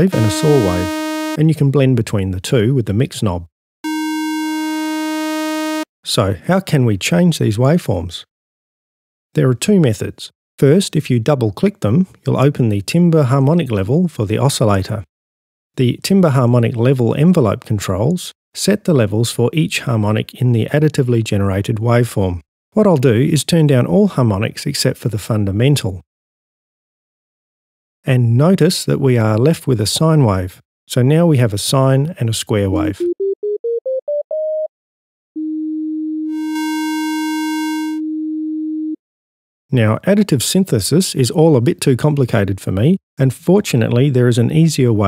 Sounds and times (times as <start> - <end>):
Speech: 0.0 - 3.5, 6.1 - 8.3, 9.4 - 15.1, 15.8 - 26.0, 28.1 - 33.0, 39.7 - 45.0.